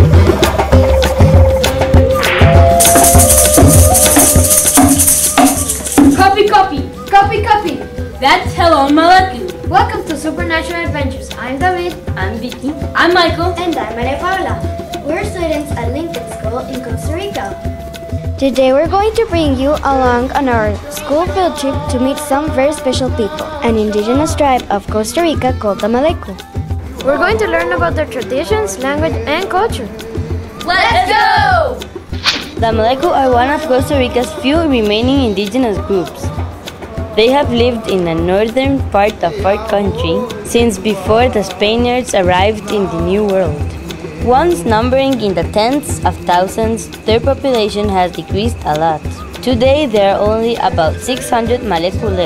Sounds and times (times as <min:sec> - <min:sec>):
Music: 0:00.0 - 0:52.2
Speech: 0:18.4 - 0:26.4, 0:32.6 - 0:36.3, 0:37.2 - 0:43.6, 0:44.2 - 0:52.2.